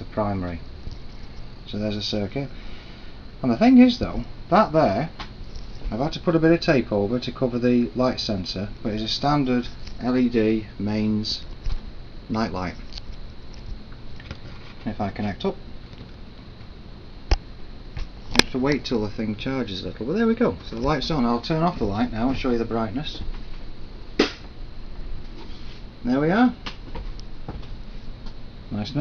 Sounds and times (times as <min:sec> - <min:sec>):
Speech: 0:00.0 - 0:00.7, 0:01.7 - 0:02.5, 0:03.4 - 0:05.2, 0:05.9 - 0:11.4, 0:12.3 - 0:12.8, 0:14.8 - 0:15.6, 0:18.5 - 0:23.3, 0:26.0 - 0:26.6, 0:28.7 - 0:29.0.